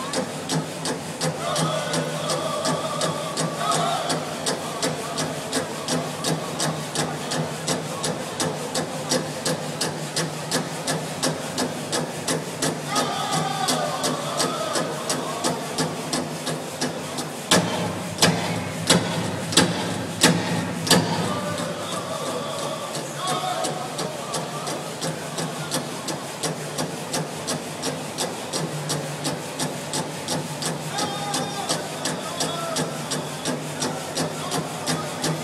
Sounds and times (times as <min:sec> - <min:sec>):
Speech: 0:00.0 - 0:35.4.